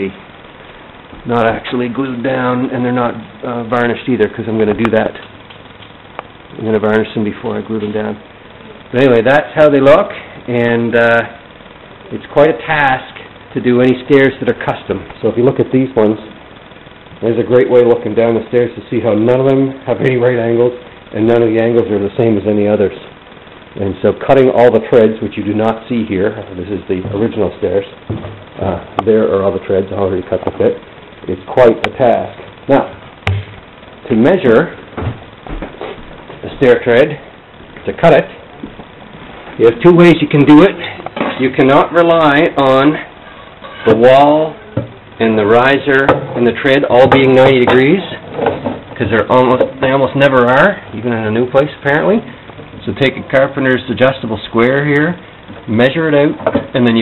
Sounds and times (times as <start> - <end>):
Speech: 0.0 - 0.2, 1.2 - 5.3, 6.5 - 8.2, 8.9 - 11.4, 12.1 - 16.4, 17.2 - 23.2, 23.8 - 28.0, 28.6 - 33.0, 34.0 - 34.8, 36.4 - 38.4, 39.6 - 44.6, 45.2 - 48.2, 49.0 - 57.0.